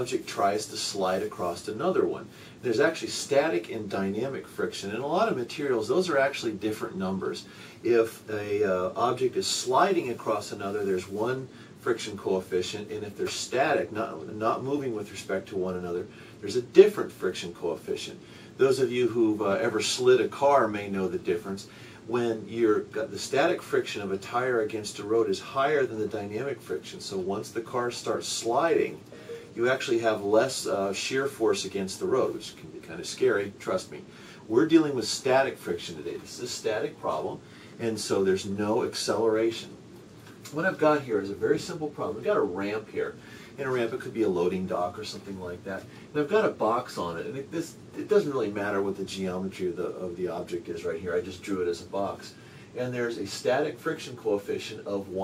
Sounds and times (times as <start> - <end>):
Speech: 0.0 - 39.8, 40.4 - 55.2.